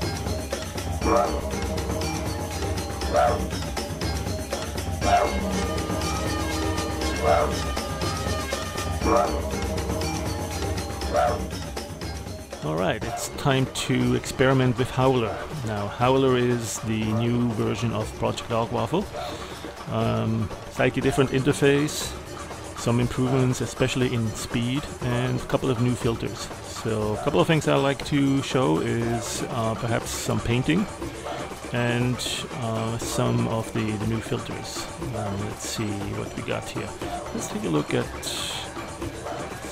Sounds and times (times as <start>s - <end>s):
Music: 0.0s - 39.7s
Speech: 12.6s - 19.3s, 19.9s - 22.2s, 22.8s - 30.9s, 31.7s - 38.7s.